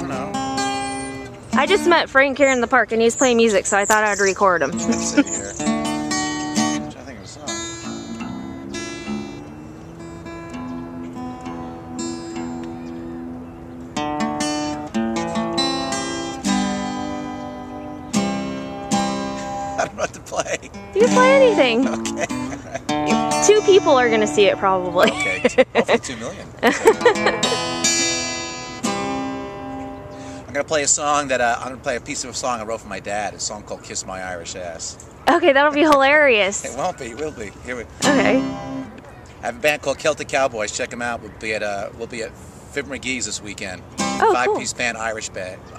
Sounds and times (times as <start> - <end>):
Music: 0.0 - 2.4, 4.7 - 20.0, 20.8 - 25.3, 27.0 - 30.4, 38.0 - 38.9
Speech: 19.8 - 22.8, 30.6 - 38.4, 39.4 - 45.6.